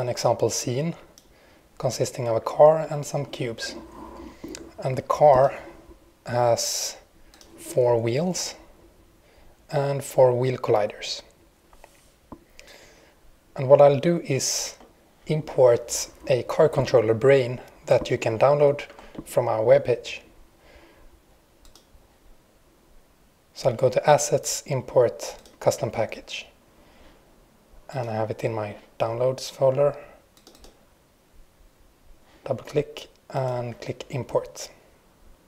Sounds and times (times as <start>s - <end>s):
Speech: 0.0s - 1.1s, 1.8s - 3.9s, 4.8s - 5.7s, 6.3s - 8.7s, 9.7s - 11.3s, 13.6s - 20.3s, 23.6s - 26.6s, 27.9s - 30.2s, 32.4s - 34.8s.